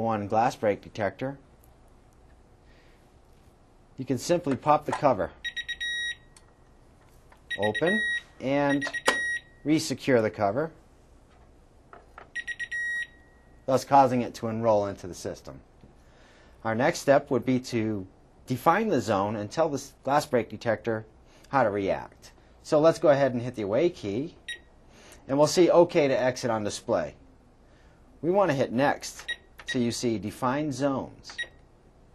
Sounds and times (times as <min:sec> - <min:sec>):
Speech: 0:00.0 - 0:01.4, 0:04.0 - 0:05.4, 0:07.6 - 0:08.9, 0:09.7 - 0:10.8, 0:13.7 - 0:15.6, 0:16.6 - 0:24.4, 0:25.3 - 0:27.2, 0:28.2 - 0:31.4
Beep, bleep: 0:05.4 - 0:06.3, 0:07.5 - 0:09.6, 0:12.4 - 0:13.5, 0:31.3 - 0:31.6.